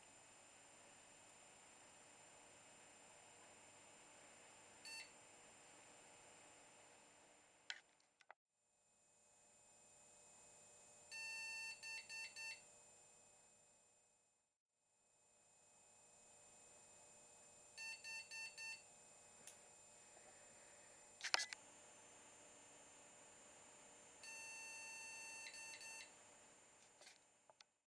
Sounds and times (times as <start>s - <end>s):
Beep, bleep: 24.3s - 26.1s.